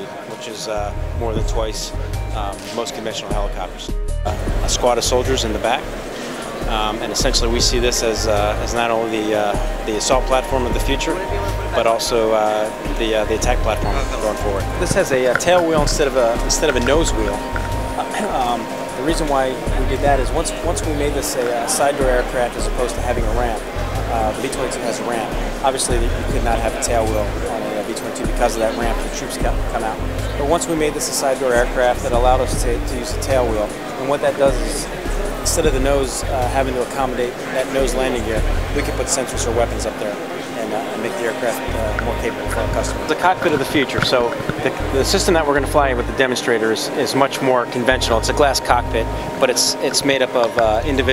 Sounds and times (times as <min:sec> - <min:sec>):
Music: 0:00.0 - 0:51.1
Speech: 0:00.0 - 0:51.1.